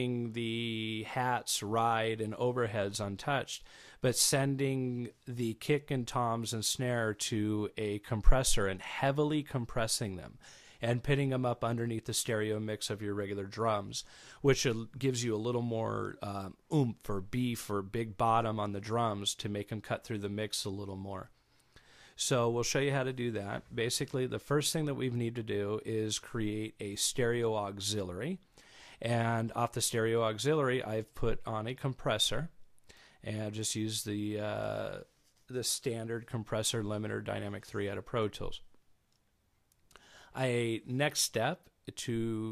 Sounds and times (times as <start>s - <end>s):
Speech: 0.0s - 21.4s, 22.2s - 28.4s, 29.0s - 32.6s, 33.2s - 38.7s, 40.4s - 42.5s.